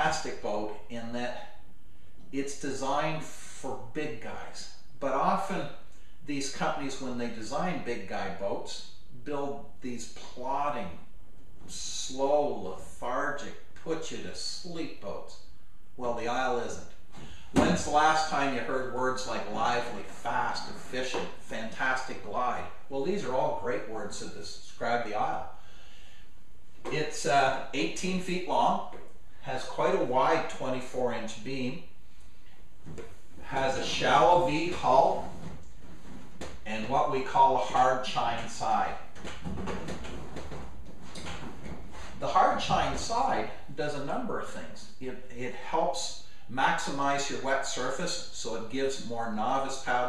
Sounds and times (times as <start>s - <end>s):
Speech: 0.0s - 1.6s, 2.3s - 11.0s, 11.7s - 15.4s, 16.0s - 16.9s, 17.6s - 25.6s, 26.8s - 31.9s, 33.4s - 35.4s, 36.6s - 39.1s, 42.2s - 50.0s.